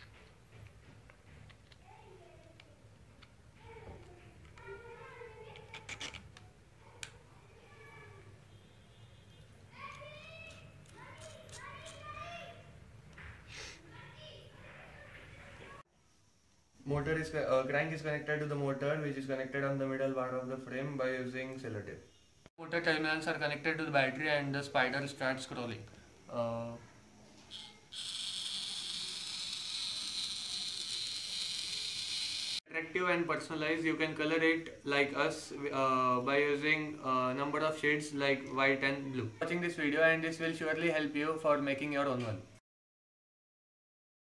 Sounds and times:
Inside, small room: 0.0s - 42.6s.

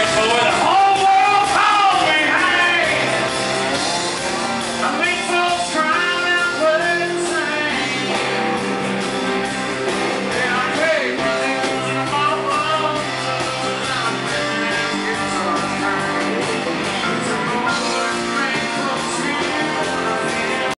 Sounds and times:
Male singing: 0.0s - 3.2s, 4.8s - 8.6s, 10.3s - 20.7s
Music: 0.0s - 20.7s.

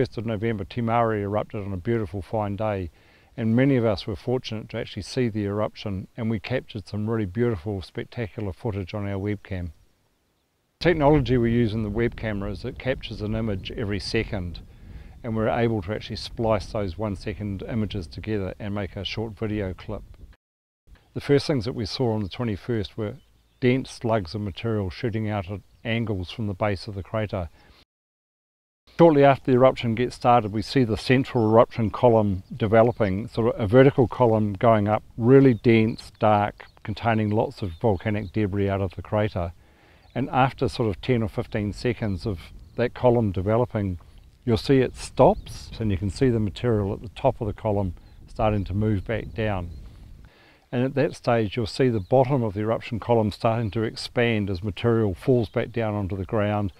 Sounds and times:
Speech: 0.0s - 9.8s, 10.8s - 14.6s, 15.2s - 20.0s, 21.2s - 27.6s, 29.0s - 39.6s, 40.2s - 49.8s, 50.7s - 56.7s.

